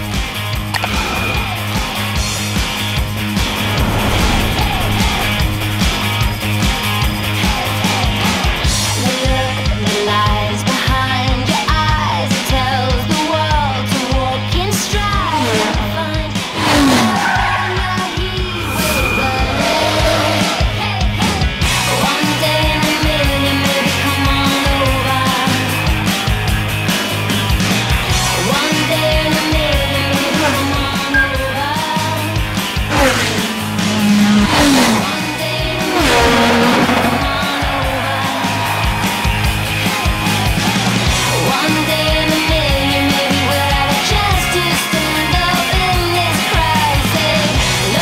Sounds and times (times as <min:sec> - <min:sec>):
Music: 0:00.0 - 0:48.0.